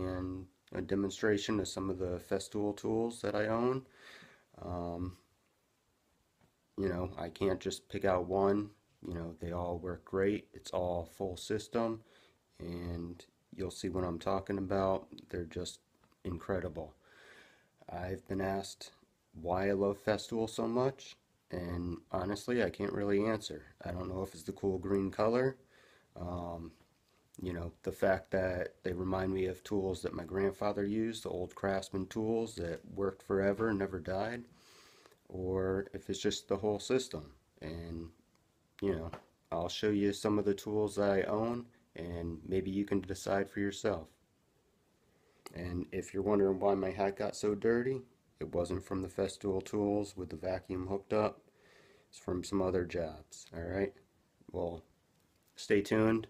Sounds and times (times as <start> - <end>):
Speech: 0.0 - 3.9, 4.6 - 5.3, 6.8 - 17.0, 17.8 - 25.6, 26.2 - 26.8, 27.4 - 34.5, 35.3 - 38.2, 38.8 - 44.2, 45.5 - 51.4, 52.1 - 54.9, 55.6 - 56.3.